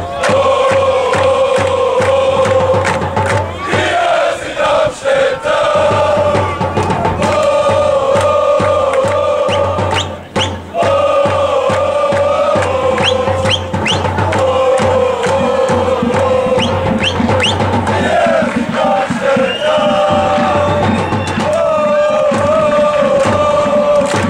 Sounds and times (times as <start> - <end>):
Music: 0.0 - 24.2
Male singing: 3.6 - 10.1, 10.8 - 24.2.